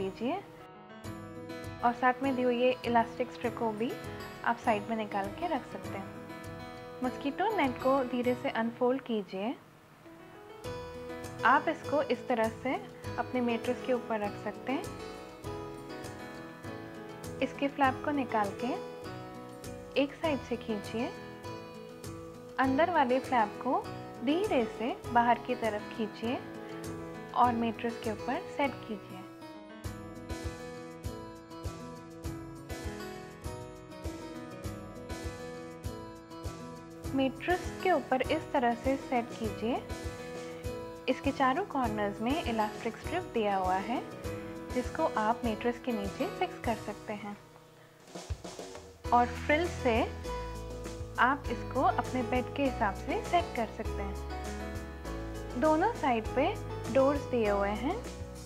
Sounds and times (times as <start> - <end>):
Speech: 0.0 - 0.5, 1.8 - 6.1, 7.0 - 9.6, 11.4 - 14.9, 17.4 - 18.8, 20.0 - 21.2, 22.6 - 26.4, 27.4 - 29.3, 37.1 - 39.8, 41.1 - 44.1, 44.7 - 47.4, 49.1 - 50.1, 51.2 - 54.1, 55.6 - 58.0
Music: 0.0 - 58.4.